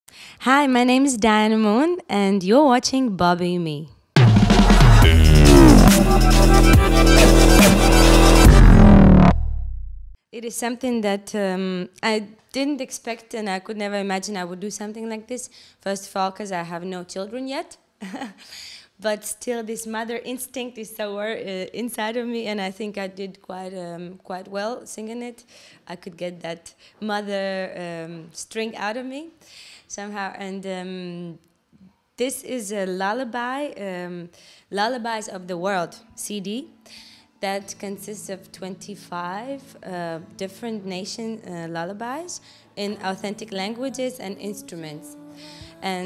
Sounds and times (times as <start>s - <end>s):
Speech: 0.4s - 3.9s, 10.4s - 17.8s, 19.0s - 29.3s, 29.9s - 31.4s, 32.2s - 36.7s, 37.4s - 46.0s
Music: 4.2s - 9.3s, 35.1s - 46.0s.